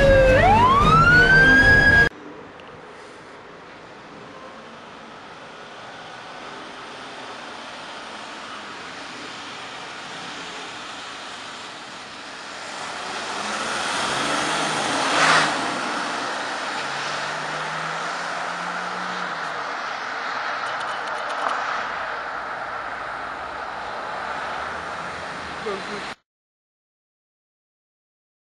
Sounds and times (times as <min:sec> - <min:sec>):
Truck: 0:00.0 - 0:26.2.